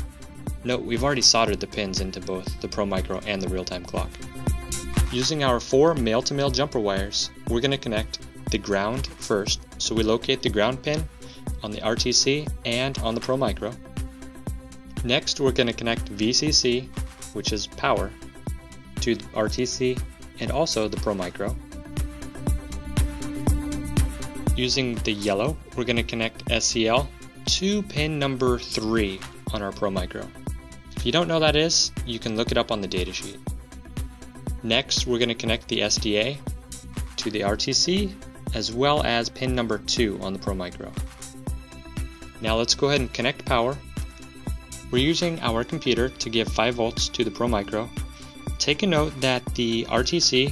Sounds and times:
Music: 0.0s - 50.5s
Speech: 0.6s - 4.2s, 5.1s - 13.8s, 15.0s - 18.2s, 19.0s - 21.6s, 24.6s - 30.4s, 31.0s - 33.4s, 34.6s - 36.4s, 37.2s - 41.0s, 42.4s - 43.8s, 44.9s - 47.9s, 48.6s - 50.5s.

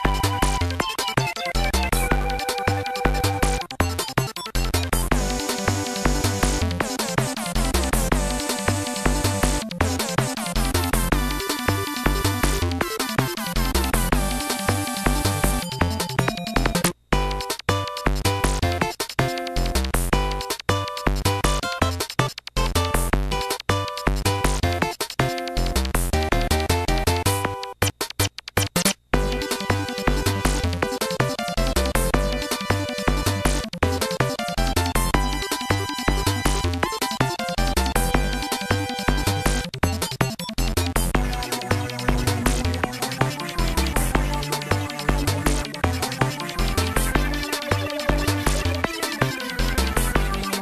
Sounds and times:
Video game music: 0.0s - 50.6s.

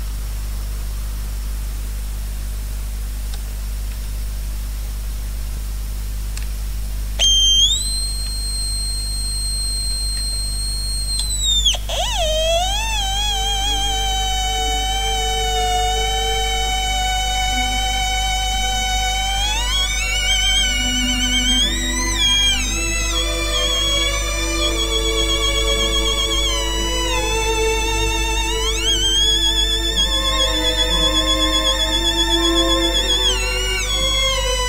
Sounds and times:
Theremin: 7.2s - 34.6s.

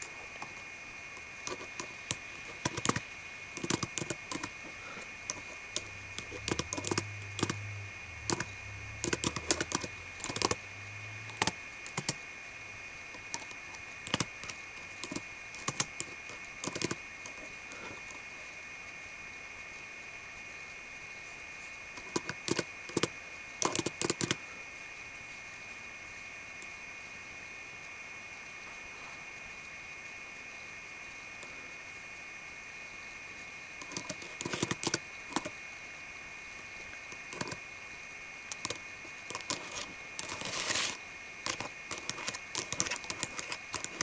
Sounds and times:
Typing: 1.5s - 3.0s, 3.6s - 4.6s, 5.3s - 7.6s, 8.2s - 10.6s, 11.3s - 12.2s, 13.2s - 17.4s, 22.0s - 24.4s, 33.8s - 35.5s, 37.2s - 37.6s, 38.5s - 44.0s.

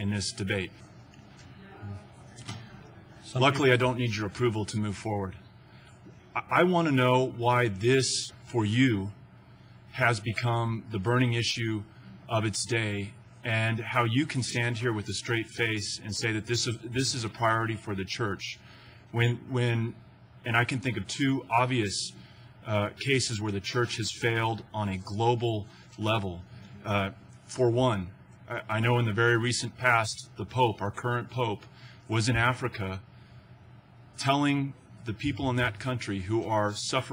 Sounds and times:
Male speech, man speaking: 0.0s - 0.9s, 3.2s - 5.5s, 6.3s - 9.2s, 9.9s - 33.1s, 34.2s - 37.1s.

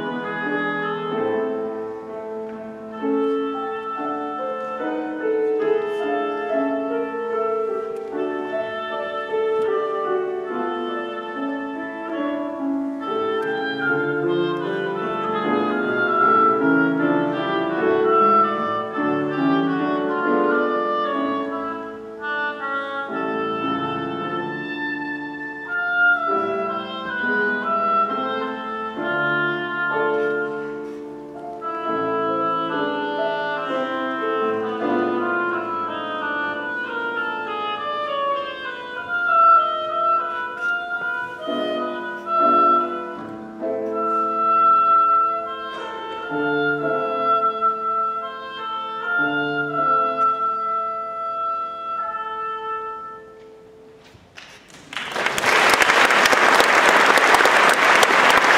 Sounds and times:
Classical music: 0.0s - 58.5s
Inside, large room or hall: 0.0s - 58.5s.

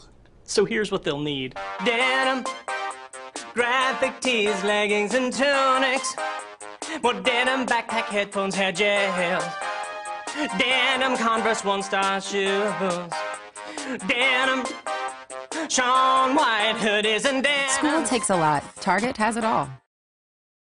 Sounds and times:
Music: 1.5s - 19.9s.

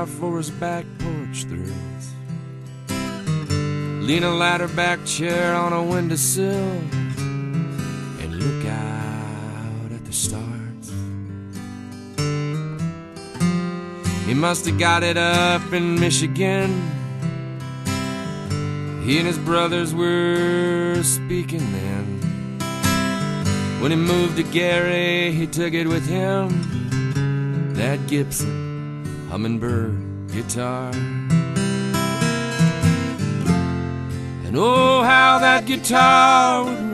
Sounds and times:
Acoustic guitar: 0.0s - 36.9s.

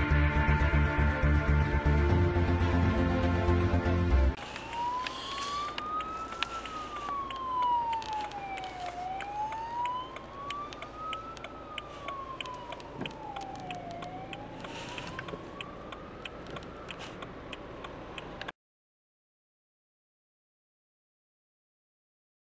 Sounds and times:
Police car (siren): 4.4s - 18.5s.

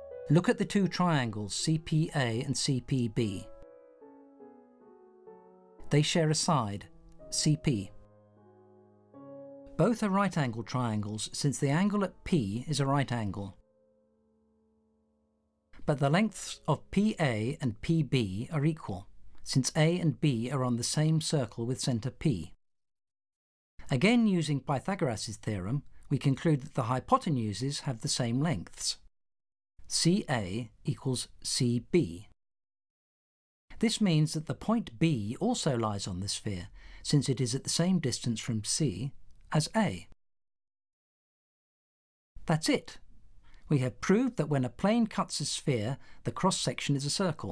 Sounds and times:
Speech: 0.3s - 3.6s, 5.8s - 8.0s, 9.8s - 13.6s, 15.8s - 22.6s, 23.8s - 29.1s, 29.9s - 32.4s, 33.8s - 40.2s, 42.4s - 43.0s, 43.7s - 47.5s.

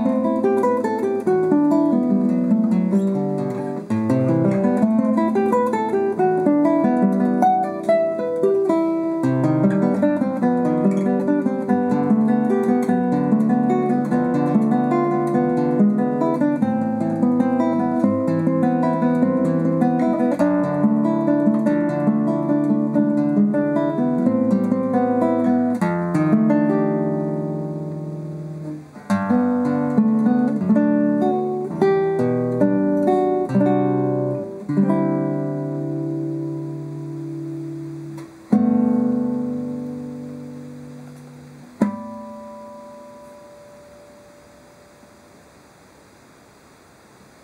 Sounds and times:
Strum: 0.0s - 45.4s
Acoustic guitar: 0.0s - 47.4s.

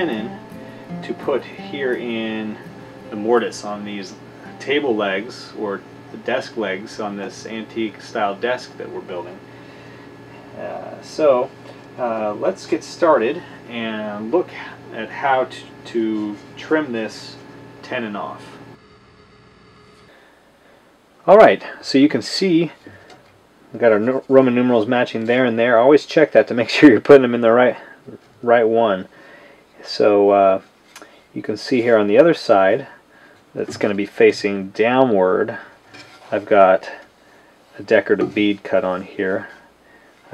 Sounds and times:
Speech: 0.0s - 0.4s, 1.0s - 9.4s, 10.6s - 18.6s, 21.2s - 22.9s, 23.7s - 29.1s, 29.8s - 30.7s, 31.4s - 33.0s, 33.6s - 37.1s, 37.8s - 39.6s.

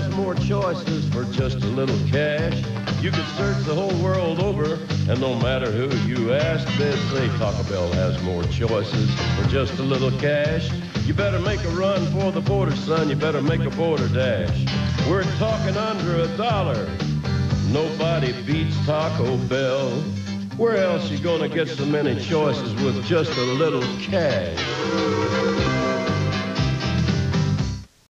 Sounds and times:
Music: 0.0s - 28.1s.

